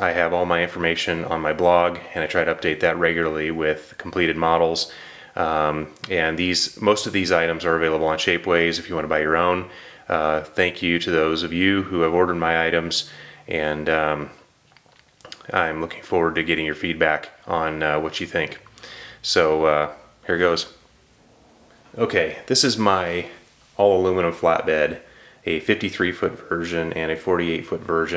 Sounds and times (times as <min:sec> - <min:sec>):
Speech: 0:00.0 - 0:14.5, 0:15.2 - 0:20.8, 0:22.0 - 0:28.1.